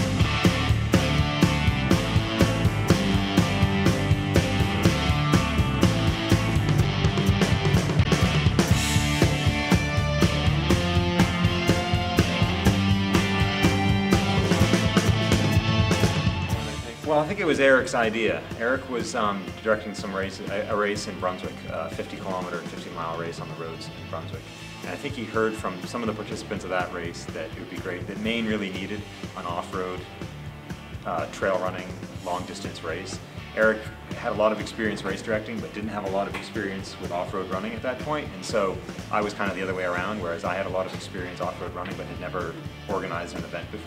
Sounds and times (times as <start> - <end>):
Music: 0.0 - 43.8
Speech: 16.6 - 30.1, 31.0 - 43.8.